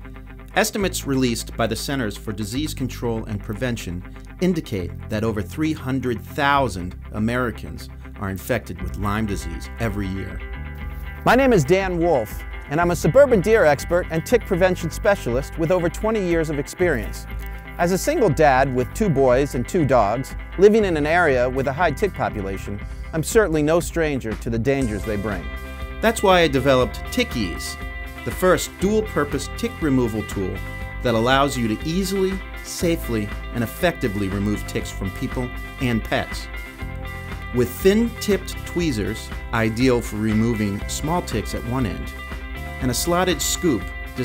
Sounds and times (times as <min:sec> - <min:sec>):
Music: 0:00.0 - 0:44.2
Speech: 0:00.6 - 0:10.4, 0:11.3 - 0:17.2, 0:17.8 - 0:36.5, 0:37.6 - 0:42.1, 0:42.8 - 0:44.2.